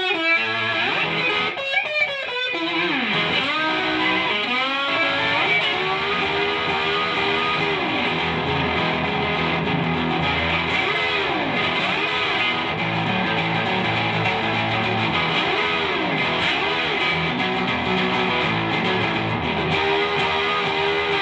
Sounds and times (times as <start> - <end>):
Electric guitar: 0.0 - 21.2
Steel guitar, slide guitar: 0.0 - 21.2.